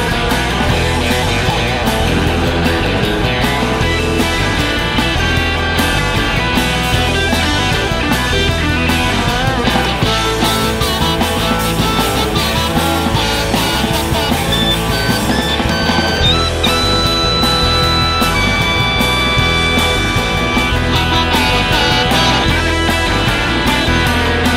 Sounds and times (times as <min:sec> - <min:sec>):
Psychedelic rock: 0:00.0 - 0:24.5.